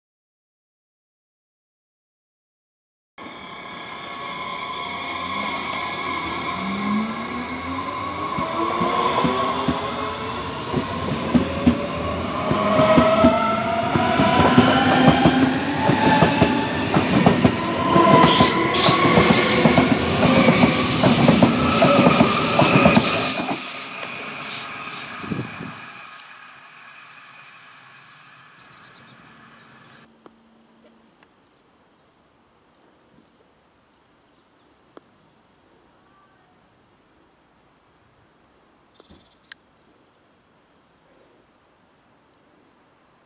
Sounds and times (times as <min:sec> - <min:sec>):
Railroad car, train wagon: 0:03.2 - 0:30.2
Train: 0:03.2 - 0:30.5.